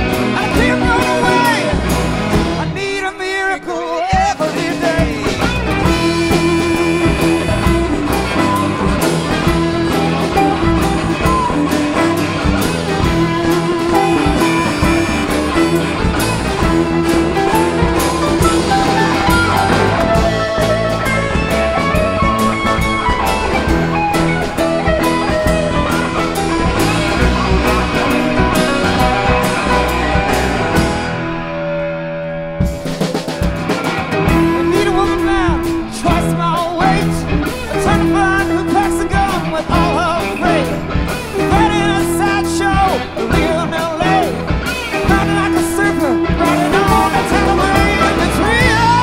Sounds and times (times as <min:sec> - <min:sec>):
Music: 0:00.0 - 0:49.0.